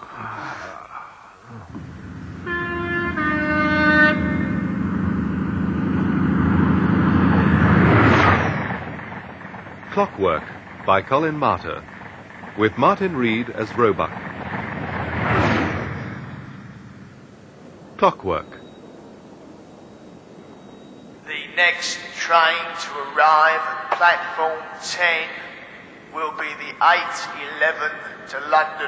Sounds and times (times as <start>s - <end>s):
Train: 1.7s - 18.8s, 19.8s - 28.8s
Speech: 9.9s - 11.8s, 12.6s - 14.1s, 18.0s - 18.6s, 21.3s - 25.5s, 26.1s - 28.8s.